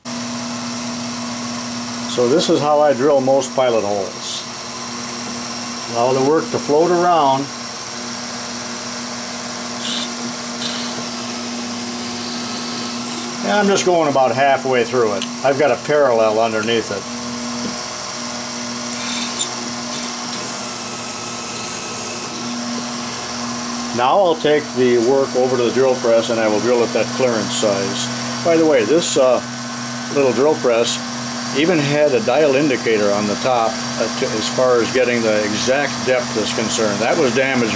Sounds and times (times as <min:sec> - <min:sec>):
Drill: 0:00.0 - 0:37.7.